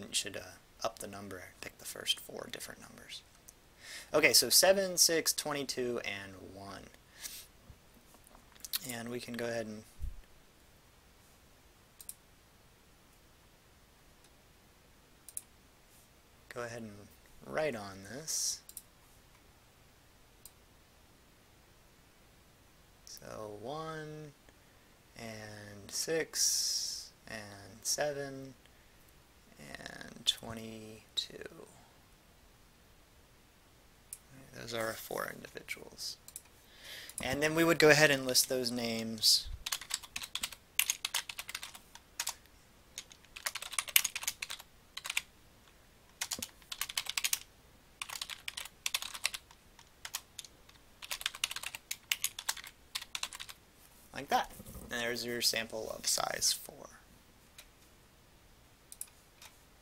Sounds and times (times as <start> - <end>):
Computer keyboard: 39.6 - 42.4, 43.0 - 45.3, 46.1 - 53.6.